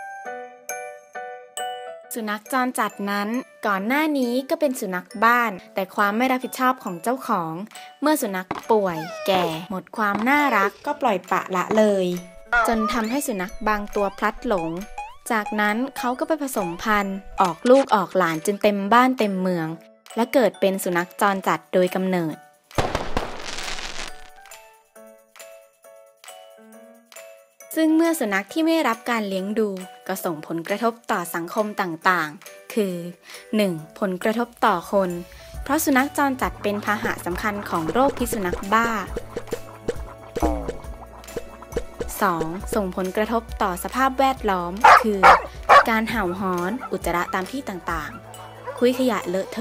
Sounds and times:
Music: 0.0s - 49.6s
Speech: 2.2s - 22.4s, 27.8s - 39.1s, 42.1s - 45.2s, 45.8s - 48.2s, 48.8s - 49.6s.

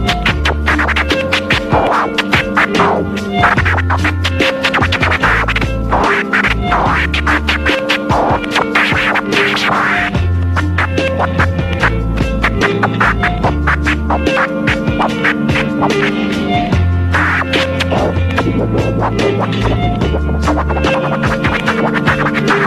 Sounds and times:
Music: 0.0s - 22.6s.

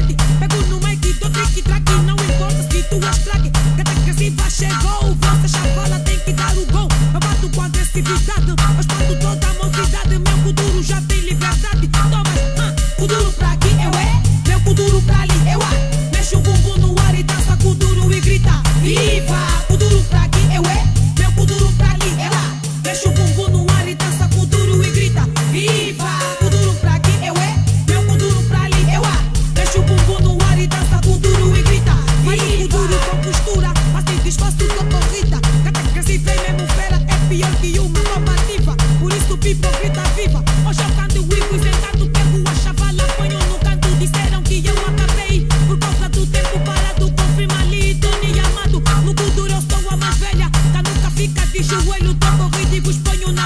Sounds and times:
Music: 0.0s - 53.4s.

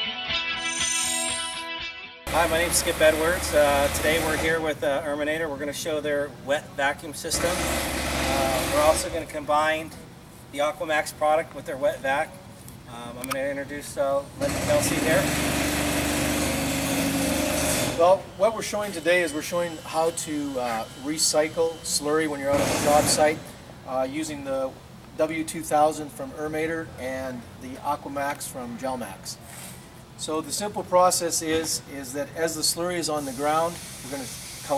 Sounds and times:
Speech: 2.4s - 7.6s, 8.3s - 10.0s, 10.6s - 12.3s, 12.9s - 15.3s, 18.0s - 29.4s, 30.2s - 34.7s.

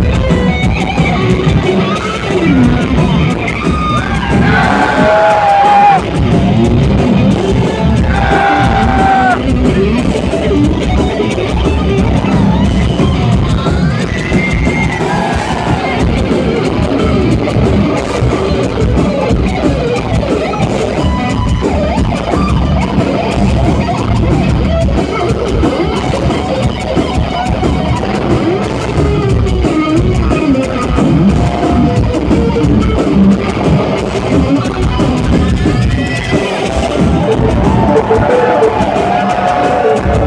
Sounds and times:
Blues: 0.0s - 40.2s.

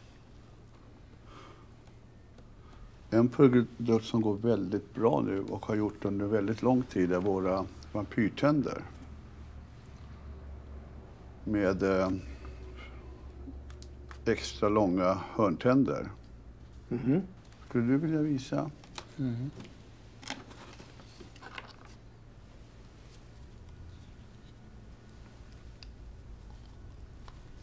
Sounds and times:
Speech: 3.1s - 9.0s, 11.4s - 12.4s, 14.2s - 16.2s, 16.9s - 19.6s.

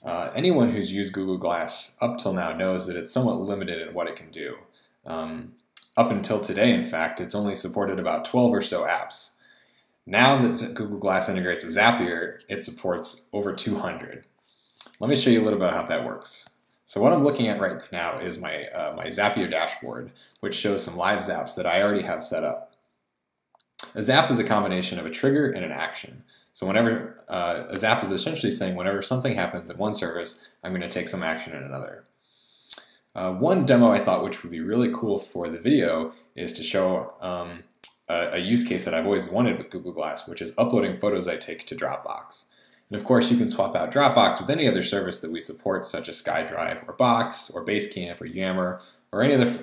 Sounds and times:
Speech: 0.0s - 9.4s, 10.1s - 14.2s, 14.8s - 22.7s, 23.8s - 32.0s, 32.7s - 49.6s.

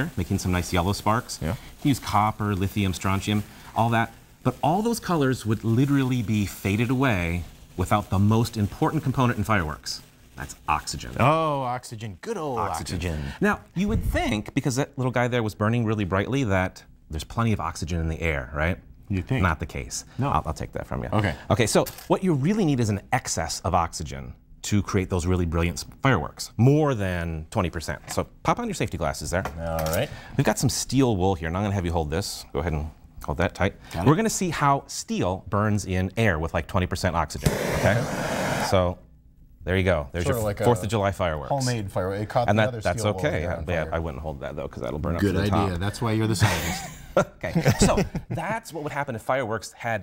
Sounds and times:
Speech: 0.0s - 38.1s, 39.6s - 46.5s, 47.4s - 50.0s.

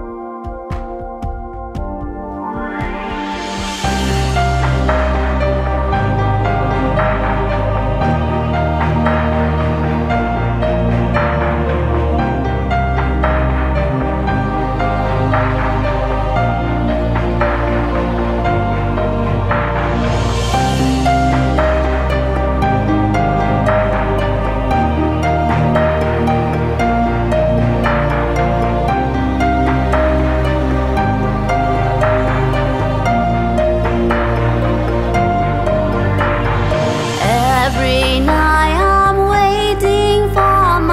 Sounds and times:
Music: 0.0s - 40.9s.

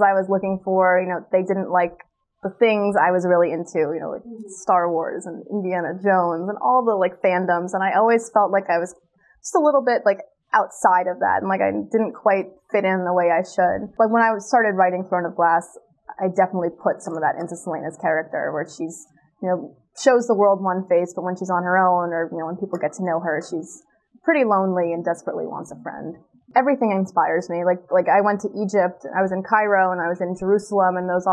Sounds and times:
Female speech, woman speaking: 0.0s - 8.9s, 9.5s - 31.3s.

